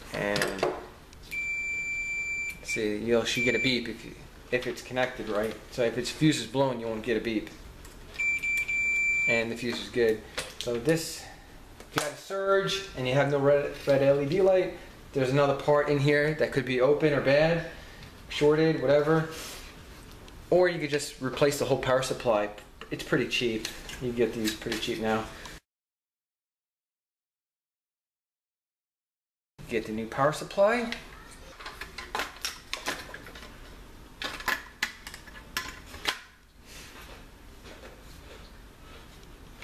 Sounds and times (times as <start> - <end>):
Speech: 0.1 - 0.7, 2.7 - 7.6, 9.3 - 11.3, 12.0 - 19.4, 20.5 - 25.4, 29.7 - 31.5.